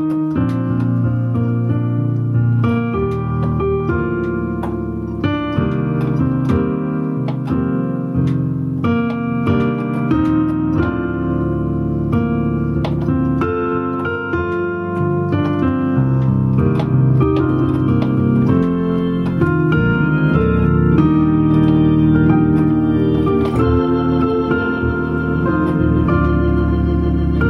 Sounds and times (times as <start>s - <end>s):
Rhythm and blues: 0.0s - 27.5s.